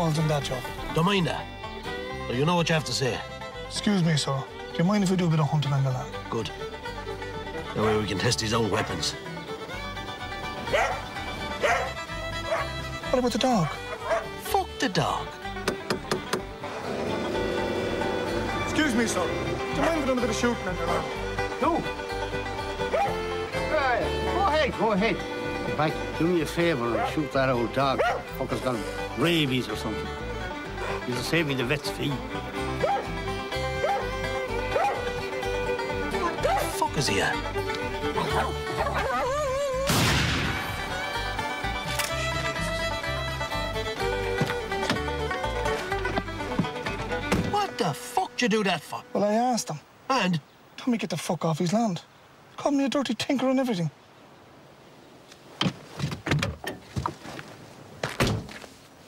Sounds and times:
Music: 0.0s - 49.8s
Bow-wow: 10.7s - 11.9s, 12.5s - 12.7s, 13.7s - 14.3s, 22.9s - 23.2s, 28.0s - 28.2s, 32.8s - 33.0s, 33.8s - 34.1s, 34.8s - 35.0s.

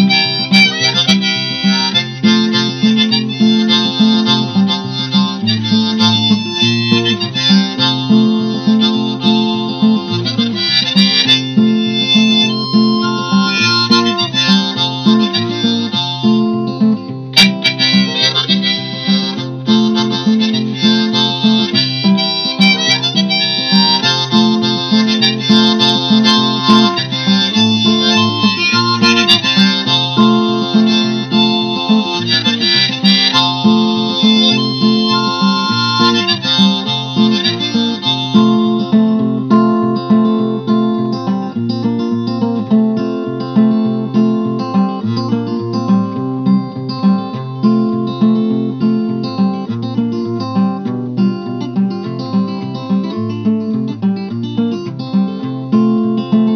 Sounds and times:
Music: 0.0s - 56.5s.

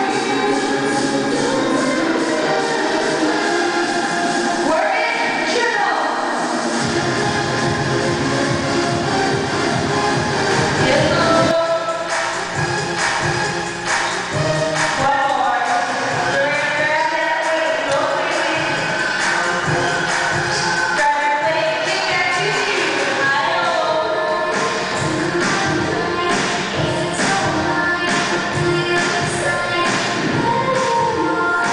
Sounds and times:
Music: 0.0s - 31.7s
Speech: 4.6s - 6.2s, 10.8s - 12.0s, 15.0s - 18.8s, 21.0s - 24.3s.

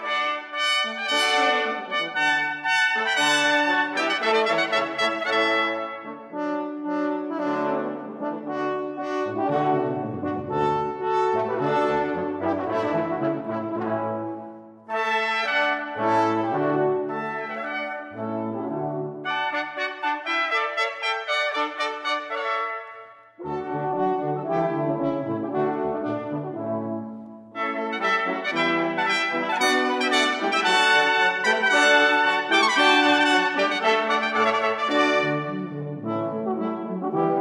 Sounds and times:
French horn: 0.0s - 37.4s.

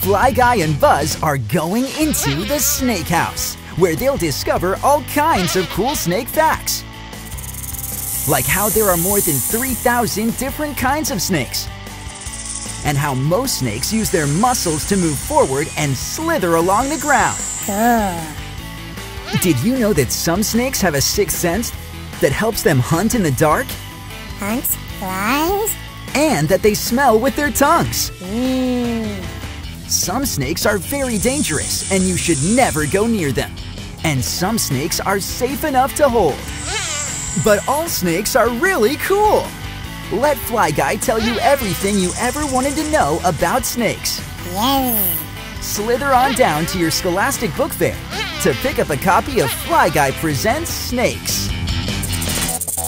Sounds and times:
Speech: 0.0s - 6.8s, 8.3s - 11.7s, 12.9s - 18.4s, 19.4s - 23.8s, 24.4s - 29.3s, 29.9s - 36.4s, 37.4s - 39.5s, 40.1s - 51.5s
Music: 0.0s - 52.8s.

